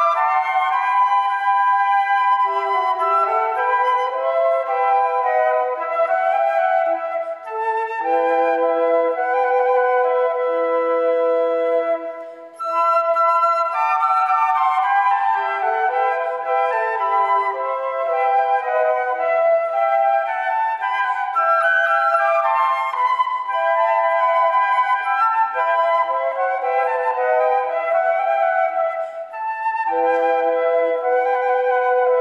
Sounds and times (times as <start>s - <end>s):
Flute: 0.0s - 32.2s.